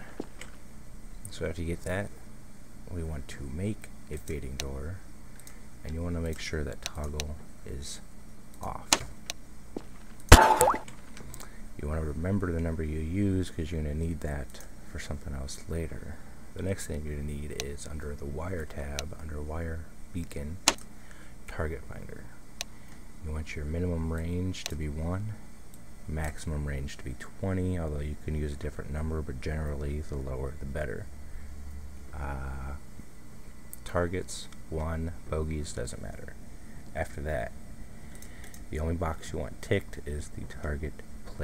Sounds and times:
Speech: 0:01.2 - 0:02.2, 0:02.9 - 0:05.1, 0:05.8 - 0:09.1, 0:11.8 - 0:20.7, 0:21.5 - 0:22.4, 0:23.2 - 0:25.4, 0:26.1 - 0:31.1, 0:32.1 - 0:32.9, 0:33.8 - 0:37.6, 0:38.7 - 0:41.4.

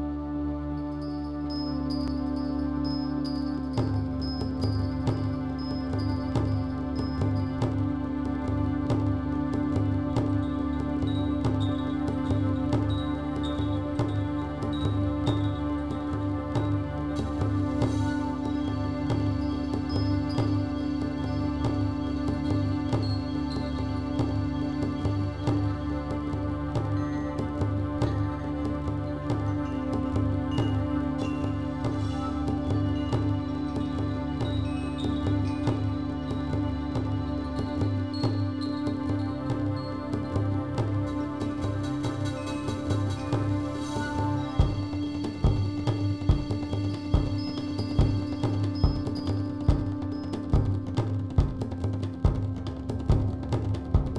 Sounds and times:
Tender music: 0:00.0 - 0:54.1.

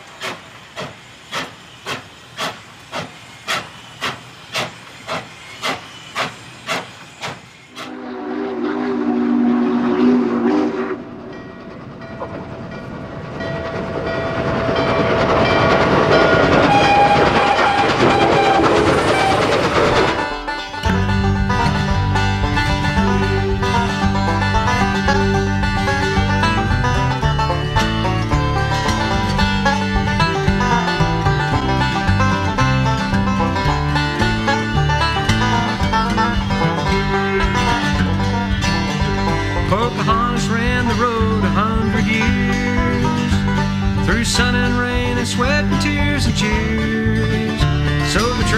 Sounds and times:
Bluegrass: 0:20.1 - 0:48.5
Happy music: 0:20.3 - 0:48.5.

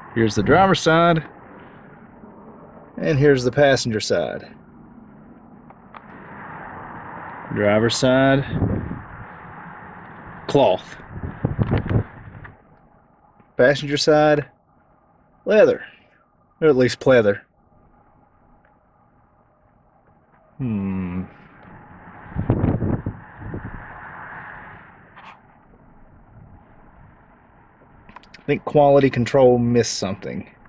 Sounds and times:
Speech: 0:00.2 - 0:01.3, 0:03.0 - 0:04.6, 0:07.5 - 0:08.6, 0:10.5 - 0:11.0, 0:13.6 - 0:14.5, 0:15.5 - 0:16.0, 0:16.6 - 0:17.4, 0:20.6 - 0:21.3, 0:28.4 - 0:30.6.

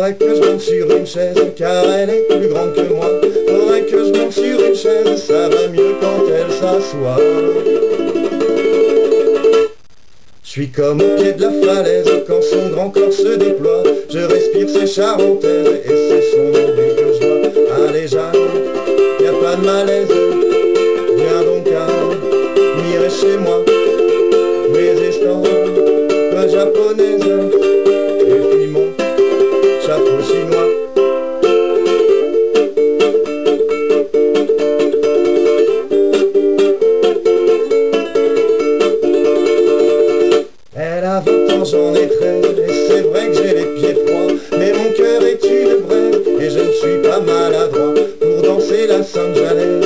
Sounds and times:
Ukulele: 0:00.0 - 0:09.9, 0:10.8 - 0:49.8
Inside, small room: 0:00.0 - 0:49.8.

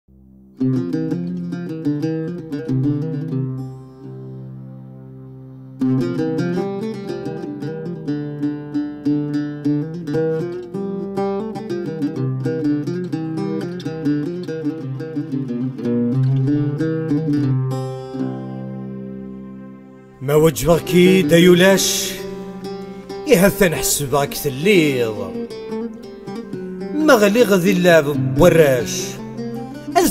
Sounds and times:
Mandolin: 0:00.5 - 0:30.1.

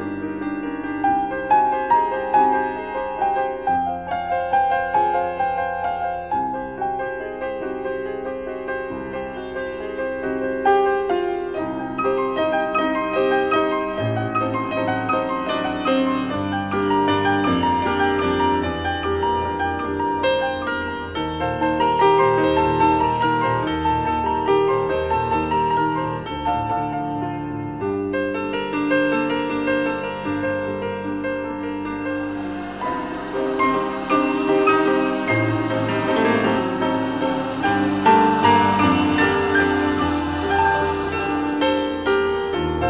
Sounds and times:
Lullaby: 0:08.9 - 0:12.6.

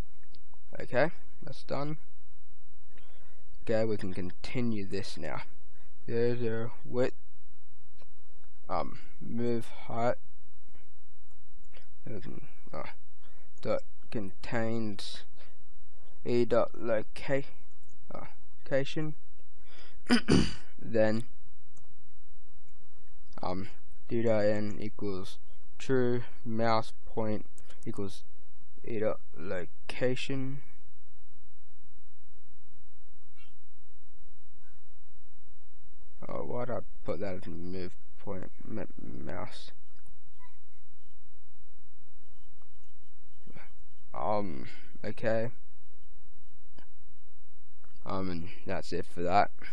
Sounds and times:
Inside, small room: 0:00.0 - 0:49.7
Speech: 0:00.8 - 0:02.0, 0:03.6 - 0:05.5, 0:06.1 - 0:07.1, 0:08.7 - 0:10.2, 0:12.1 - 0:12.9, 0:13.6 - 0:15.3, 0:16.2 - 0:19.2, 0:20.1 - 0:21.3, 0:23.4 - 0:28.2, 0:28.9 - 0:30.7, 0:36.2 - 0:39.7, 0:44.2 - 0:45.6, 0:48.0 - 0:49.7.

